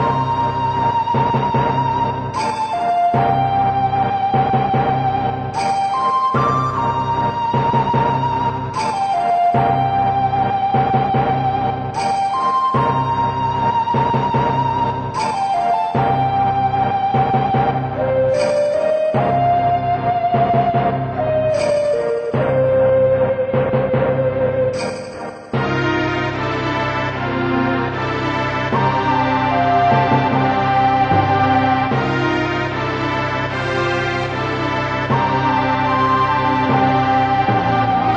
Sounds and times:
Music: 0:00.0 - 0:38.1.

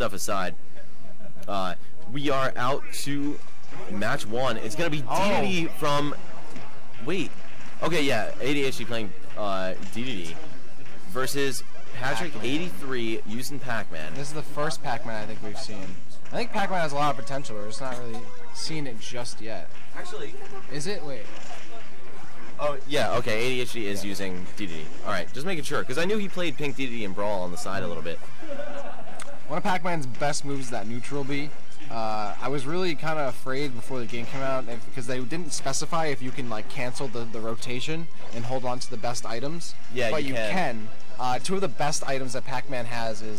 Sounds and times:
Speech: 0:01.5 - 0:06.2, 0:07.0 - 0:10.4, 0:11.1 - 0:21.3, 0:22.6 - 0:28.2, 0:29.5 - 0:43.3
Music: 0:05.5 - 0:43.3.

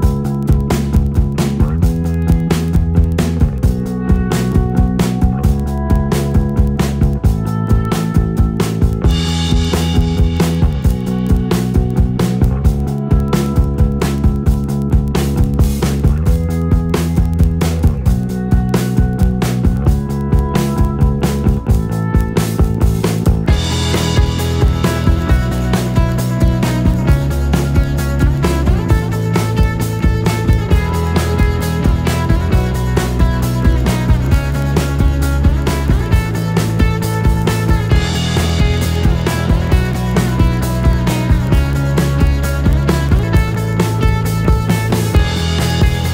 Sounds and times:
Music: 0:00.0 - 0:46.1.

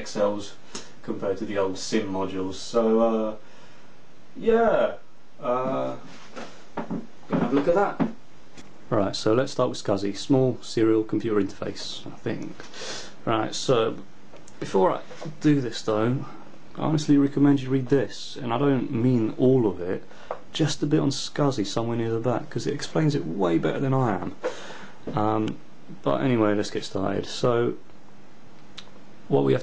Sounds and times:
Speech: 0:00.0 - 0:03.4, 0:04.4 - 0:06.1, 0:07.3 - 0:08.2, 0:08.9 - 0:12.6, 0:13.2 - 0:24.4, 0:25.1 - 0:27.8, 0:29.3 - 0:29.6.

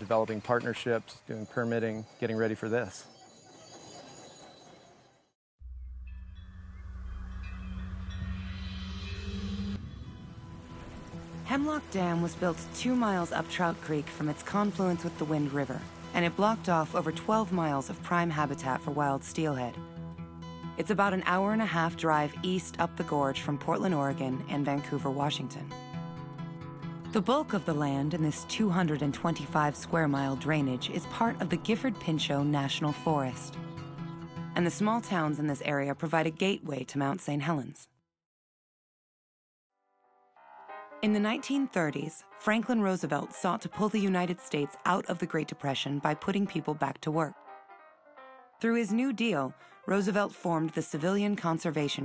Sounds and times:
Speech: 0:00.0 - 0:03.1, 0:11.5 - 0:19.8, 0:20.8 - 0:25.7, 0:27.2 - 0:33.5, 0:34.6 - 0:37.9, 0:41.0 - 0:47.4, 0:48.6 - 0:52.0
Music: 0:05.6 - 0:37.0, 0:39.8 - 0:52.0.

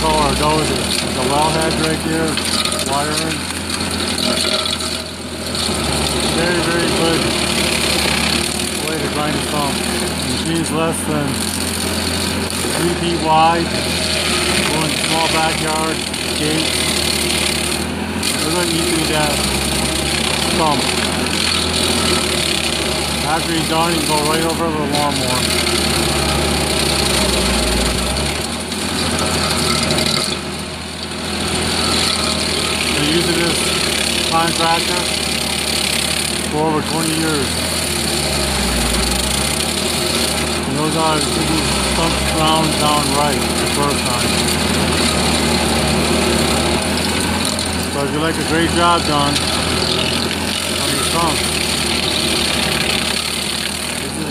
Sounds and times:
Engine: 0:00.0 - 0:54.3
Vehicle: 0:00.0 - 0:54.3
Vibration: 0:00.0 - 0:54.3.

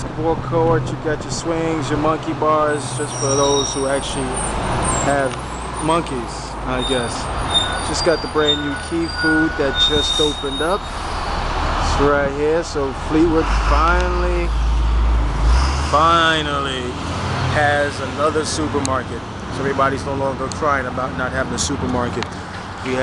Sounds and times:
Speech: 0:00.0 - 0:04.4, 0:05.0 - 0:07.3, 0:07.9 - 0:10.8, 0:11.8 - 0:14.5, 0:15.9 - 0:17.0, 0:17.6 - 0:23.0.

